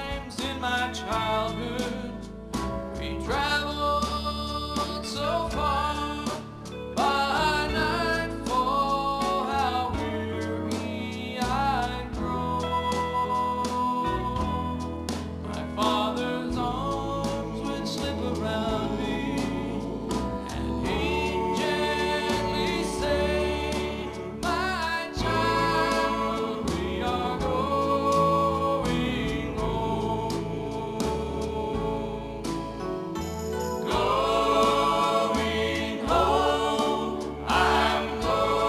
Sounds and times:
Gospel music: 0:00.0 - 0:38.6.

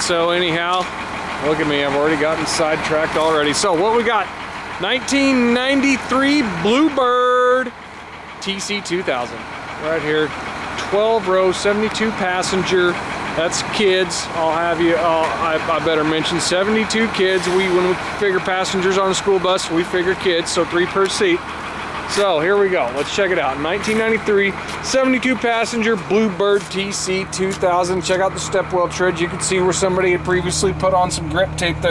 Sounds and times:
Speech: 0:00.0 - 0:07.8, 0:08.4 - 0:21.4, 0:22.1 - 0:31.9
Vehicle: 0:00.0 - 0:31.9.

